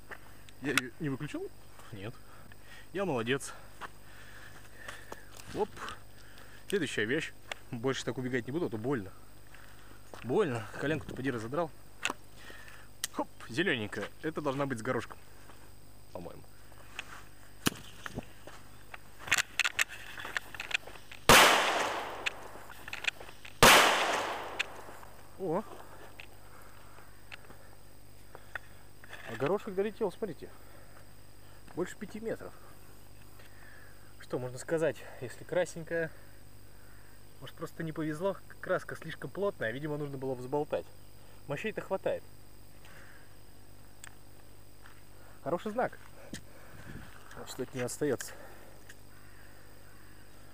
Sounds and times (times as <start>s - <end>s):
Speech: 0.6s - 2.2s, 2.9s - 3.6s, 5.5s - 6.0s, 6.7s - 9.2s, 10.2s - 11.8s, 13.1s - 15.2s, 16.1s - 16.5s, 25.4s - 25.8s, 29.2s - 30.6s, 31.7s - 32.6s, 34.2s - 36.2s, 37.4s - 40.9s, 41.5s - 42.2s, 45.4s - 46.0s, 47.3s - 48.4s
Firecracker: 21.3s - 22.9s, 23.6s - 25.0s.